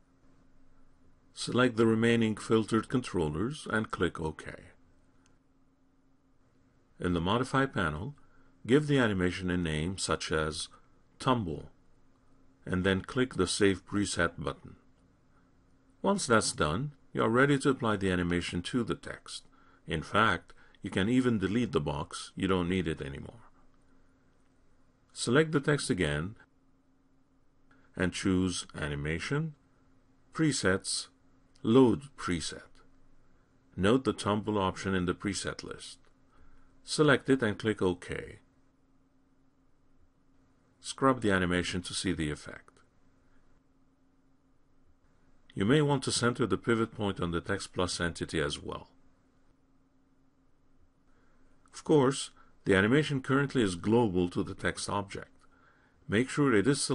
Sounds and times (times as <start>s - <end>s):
Narration, monologue: 0.0s - 56.9s.